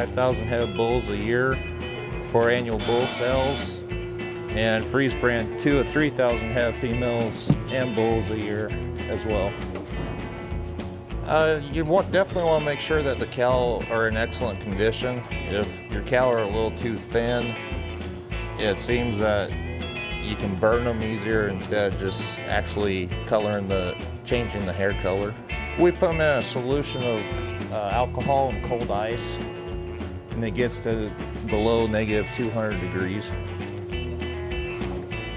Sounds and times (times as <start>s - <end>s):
Speech: 0.0s - 1.6s, 2.3s - 3.8s, 4.6s - 9.6s, 11.2s - 17.6s, 18.6s - 19.5s, 20.2s - 29.4s, 30.4s - 33.4s
Music: 0.0s - 35.3s.